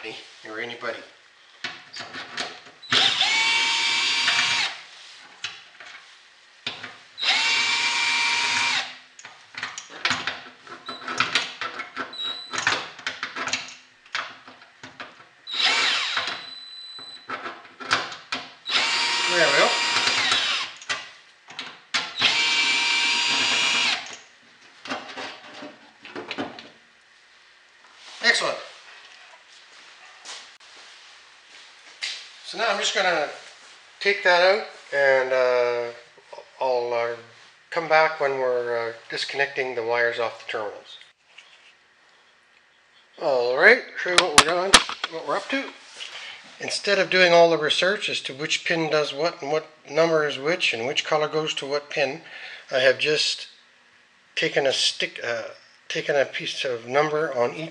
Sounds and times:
Power tool: 0:02.9 - 0:04.8, 0:07.2 - 0:09.0, 0:15.5 - 0:16.5, 0:18.7 - 0:20.8, 0:22.2 - 0:24.2.

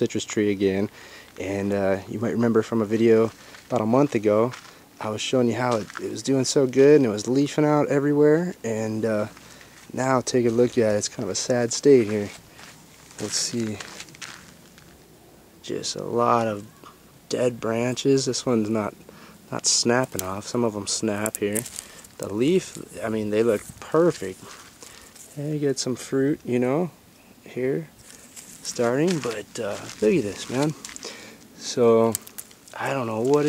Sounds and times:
Speech: 0:00.0 - 0:12.4, 0:13.2 - 0:13.9, 0:15.6 - 0:16.7, 0:17.3 - 0:24.5, 0:25.3 - 0:27.9, 0:28.6 - 0:30.8, 0:31.6 - 0:32.2, 0:32.8 - 0:33.4
Rustling leaves: 0:00.0 - 0:33.4.

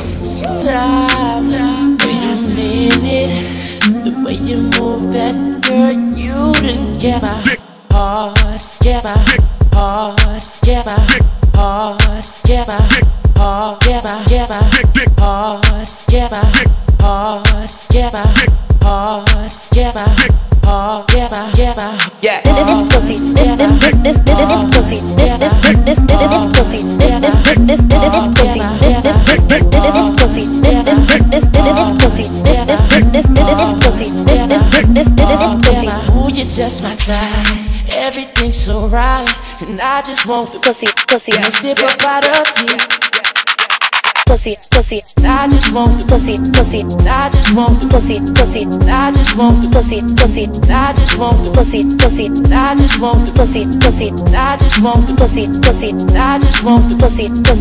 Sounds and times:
Theme music: 0:00.0 - 0:03.1, 0:22.5 - 0:37.0
Pop music: 0:00.0 - 0:57.6
Exciting music: 0:22.5 - 0:37.8, 0:45.2 - 0:57.6.

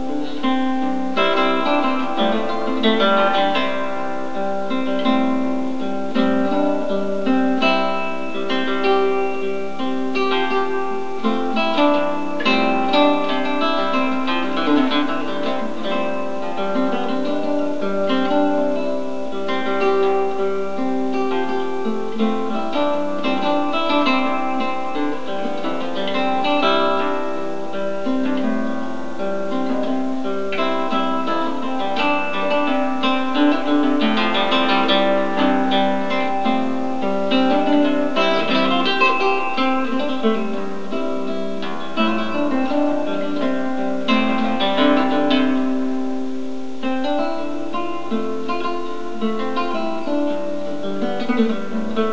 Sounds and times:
Acoustic guitar: 0:00.0 - 0:52.1
Bowed string instrument: 0:00.0 - 0:52.1.

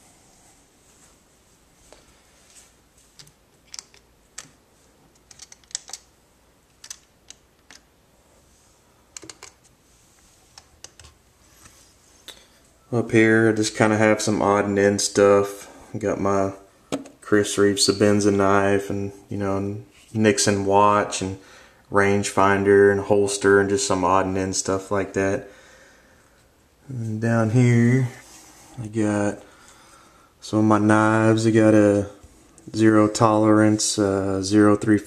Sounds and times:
Speech: 0:12.9 - 0:25.5, 0:26.8 - 0:28.2, 0:28.8 - 0:29.5, 0:30.4 - 0:35.0.

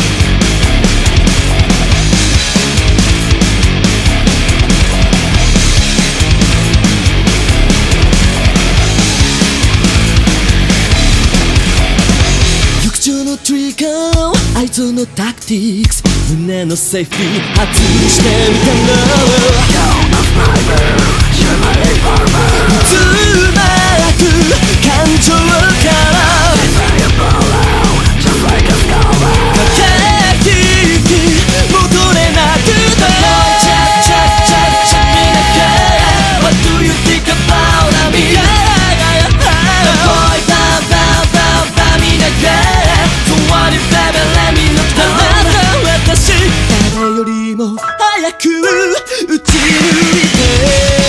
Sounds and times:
Music: 0:00.0 - 0:51.0.

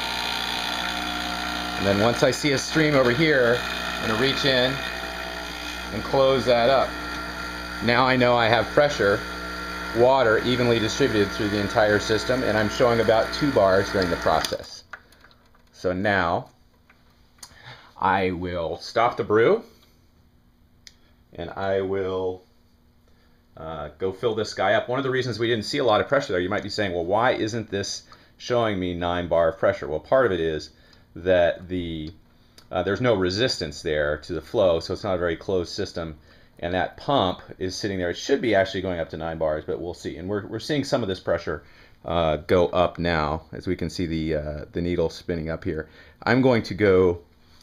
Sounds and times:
Speech: 0:01.8 - 0:04.9, 0:05.9 - 0:06.9, 0:07.8 - 0:09.2, 0:09.9 - 0:14.9, 0:15.8 - 0:16.5, 0:18.0 - 0:19.7, 0:21.3 - 0:22.4, 0:23.6 - 0:47.3.

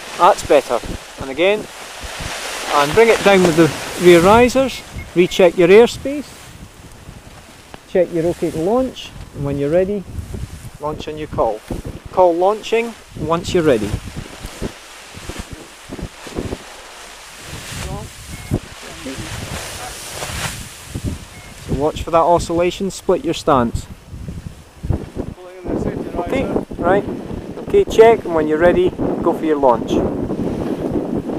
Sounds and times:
Rustling leaves: 0:00.0 - 0:29.3
Outside, rural or natural: 0:00.0 - 0:31.3
Speech: 0:00.2 - 0:01.7, 0:02.7 - 0:06.3, 0:07.9 - 0:10.1, 0:10.8 - 0:14.0, 0:17.8 - 0:18.1, 0:18.8 - 0:20.0, 0:21.8 - 0:23.9, 0:25.4 - 0:27.0, 0:27.7 - 0:30.0.

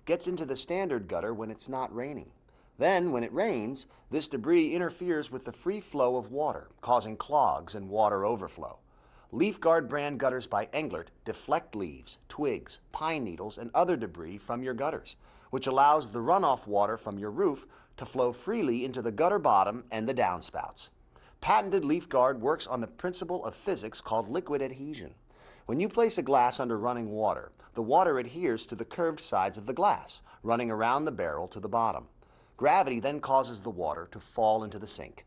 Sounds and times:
Speech: 0:00.0 - 0:35.2.

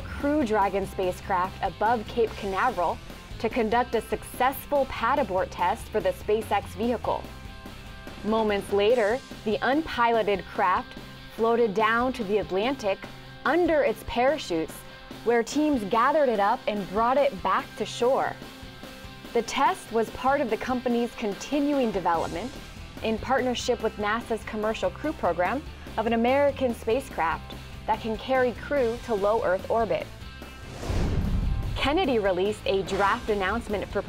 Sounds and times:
Speech: 0:00.0 - 0:07.2, 0:08.2 - 0:18.4, 0:19.4 - 0:30.1, 0:31.8 - 0:34.0
Music: 0:00.0 - 0:34.0.

